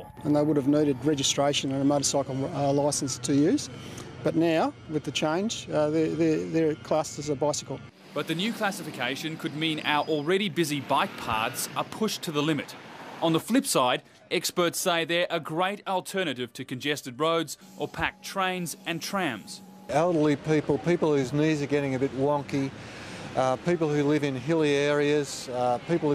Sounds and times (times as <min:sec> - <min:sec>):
Speech: 0:04.3 - 0:22.7, 0:23.4 - 0:26.1.